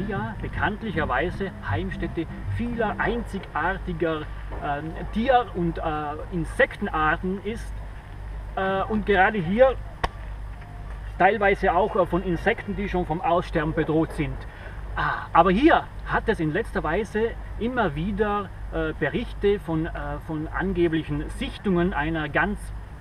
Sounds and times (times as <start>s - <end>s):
Speech: 0.0s - 7.7s, 8.6s - 9.8s, 11.2s - 22.8s.